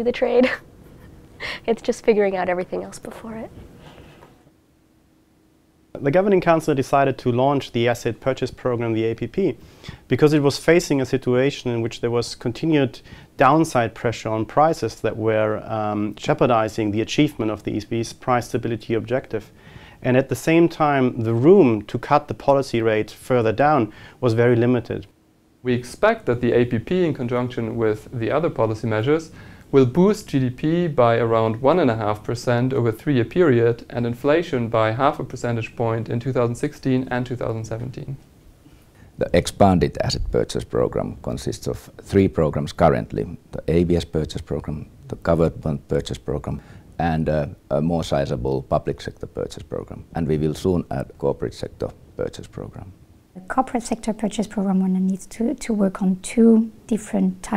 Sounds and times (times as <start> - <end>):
Speech: 0.0 - 0.5, 1.7 - 3.5, 6.0 - 25.1, 25.7 - 38.2, 39.2 - 57.5.